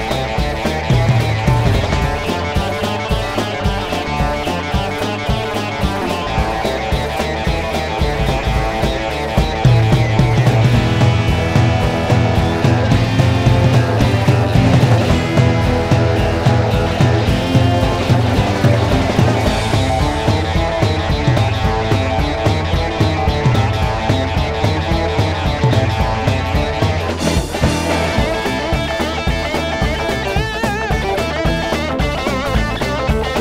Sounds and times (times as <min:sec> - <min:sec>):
Soundtrack music: 0:00.0 - 0:32.8
Video game music: 0:00.1 - 0:29.7.